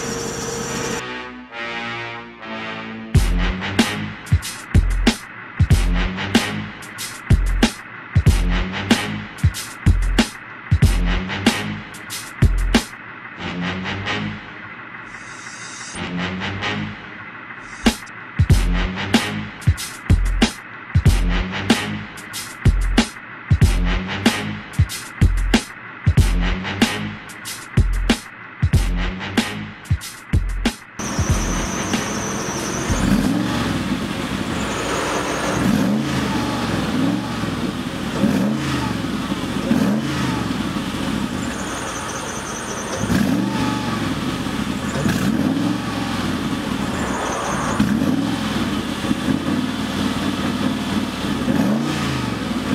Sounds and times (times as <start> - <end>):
Music: 0.5 - 33.4.